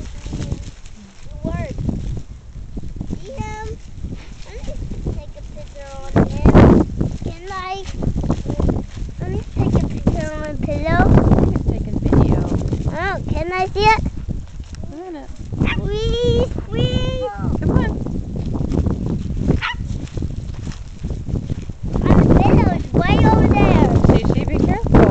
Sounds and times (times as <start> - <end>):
Speech: 1.3 - 1.8, 4.5 - 6.6, 9.2 - 14.0, 22.1 - 24.9.